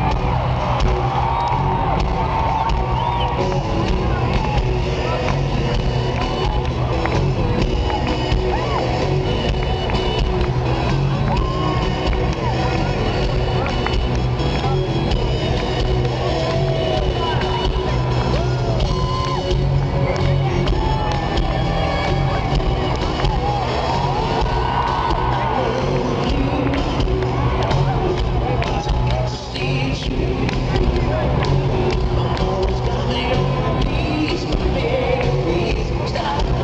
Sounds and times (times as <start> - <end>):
Whoop: 0.0 - 5.2, 7.8 - 9.2, 11.1 - 12.2, 16.3 - 19.6, 20.6 - 29.4
Music: 0.0 - 36.6.